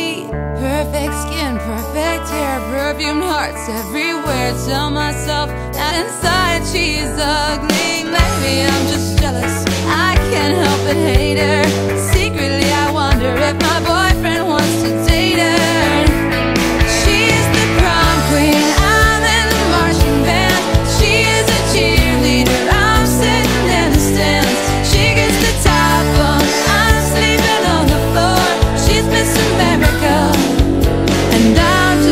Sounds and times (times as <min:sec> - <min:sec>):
Music: 0:00.0 - 0:32.1.